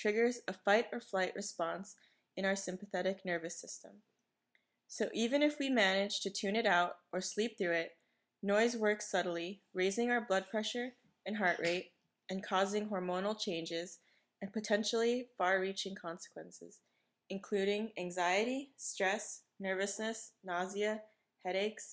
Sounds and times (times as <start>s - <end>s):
Speech: 0.0s - 3.9s, 4.9s - 21.9s.